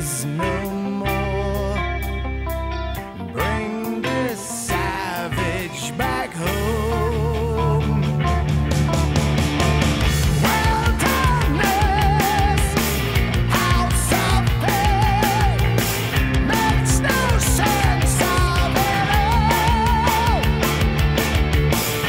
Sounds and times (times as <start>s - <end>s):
Rock music: 0.0s - 22.0s.